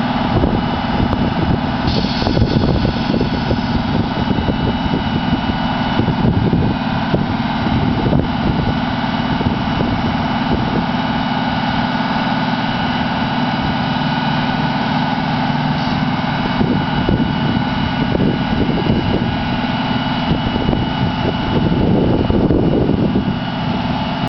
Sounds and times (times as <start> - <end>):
Vehicle: 0.0 - 24.2.